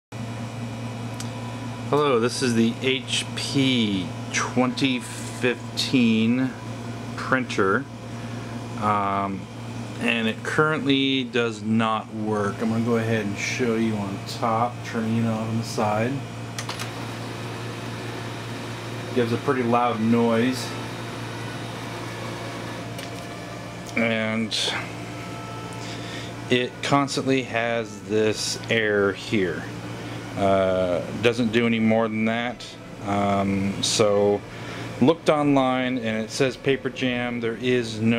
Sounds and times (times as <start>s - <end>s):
Speech: 1.9s - 6.6s, 7.2s - 7.9s, 8.8s - 16.3s, 19.1s - 20.8s, 23.9s - 24.9s, 26.5s - 29.7s, 30.4s - 34.4s, 35.0s - 38.1s.